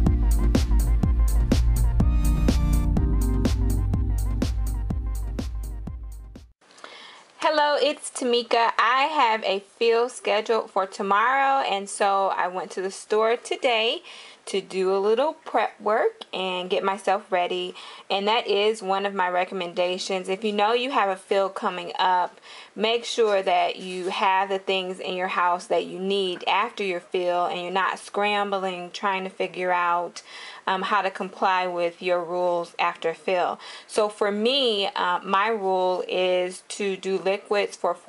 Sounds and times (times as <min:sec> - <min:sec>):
Speech: 0:07.4 - 0:38.0.